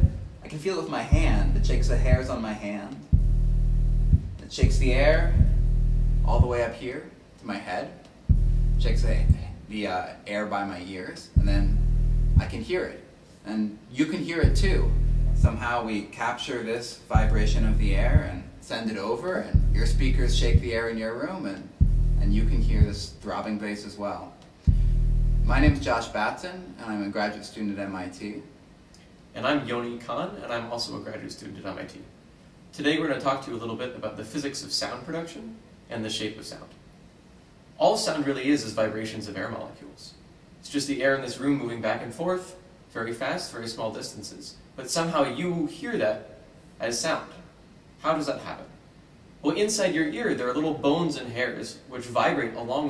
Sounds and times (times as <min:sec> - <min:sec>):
Speech: 0:00.0 - 0:03.1, 0:04.4 - 0:05.6, 0:06.3 - 0:08.2, 0:08.8 - 0:11.8, 0:12.4 - 0:24.5, 0:25.5 - 0:28.6, 0:29.3 - 0:36.8, 0:37.8 - 0:48.8, 0:49.4 - 0:52.9.